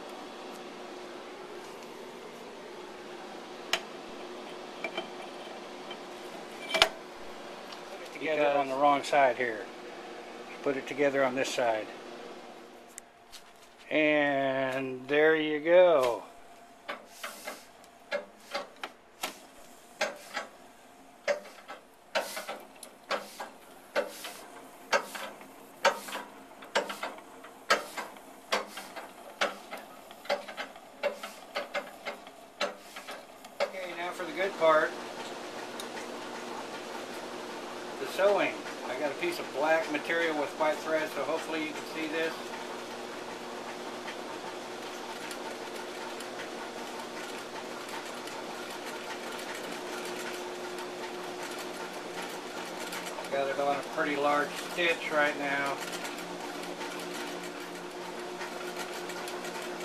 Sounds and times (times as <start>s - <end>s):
Speech: 8.0s - 9.7s, 10.5s - 12.0s, 13.9s - 16.3s, 33.6s - 35.0s, 38.0s - 42.5s, 53.2s - 55.8s
Sewing machine: 21.3s - 59.8s.